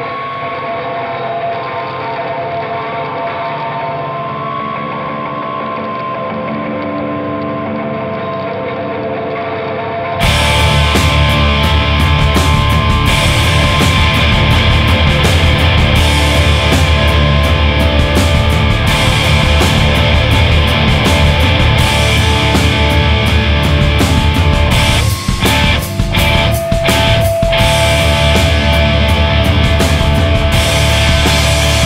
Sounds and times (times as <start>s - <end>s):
Music: 0.0s - 31.8s.